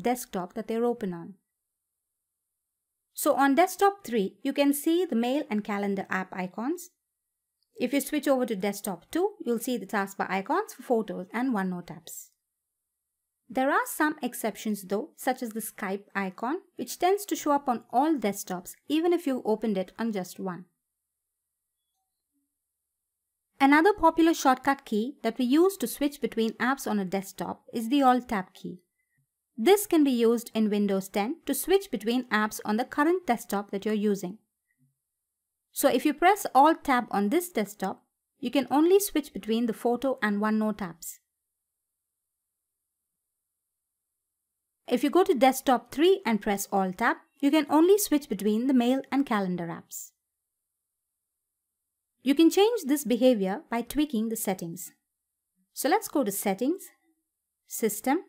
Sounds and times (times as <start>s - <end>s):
Speech: 0.0s - 1.4s, 3.2s - 6.9s, 7.8s - 12.3s, 13.5s - 20.6s, 23.6s - 28.8s, 29.6s - 34.4s, 35.8s - 41.2s, 44.9s - 50.1s, 52.3s - 55.0s, 55.8s - 56.9s, 57.7s - 58.2s.